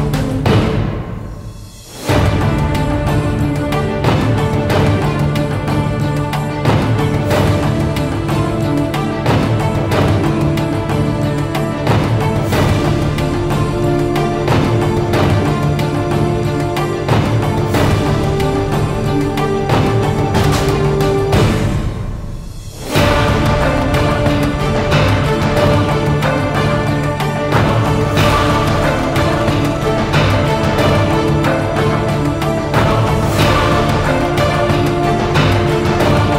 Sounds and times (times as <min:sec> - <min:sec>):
Music: 0:00.0 - 0:36.3.